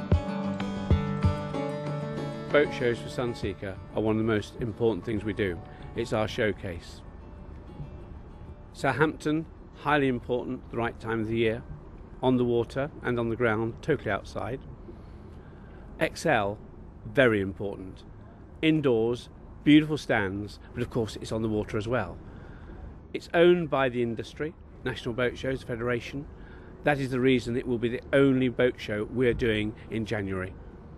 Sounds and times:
Speech: 2.5s - 7.0s, 8.8s - 11.6s, 12.2s - 14.6s, 16.0s - 18.0s, 18.6s - 22.2s, 23.2s - 30.6s.

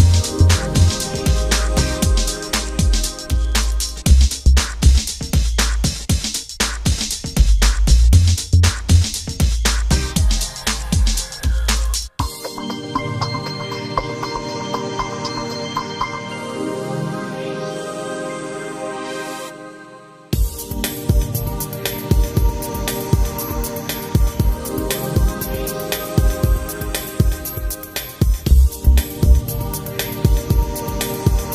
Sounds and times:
Music: 0.0s - 31.5s.

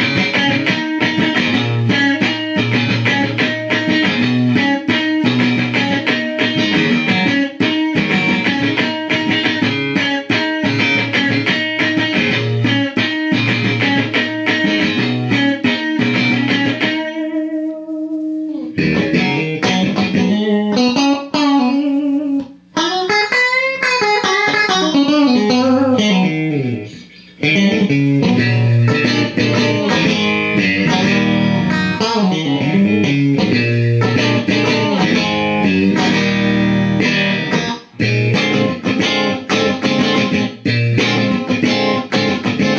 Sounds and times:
Guitar: 0.0s - 42.7s.

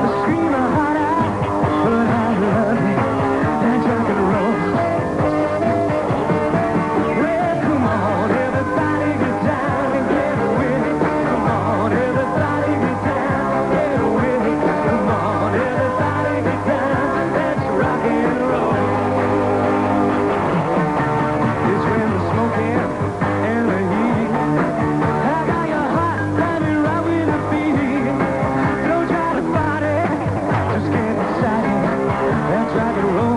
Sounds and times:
Rock and roll: 0.0s - 33.3s.

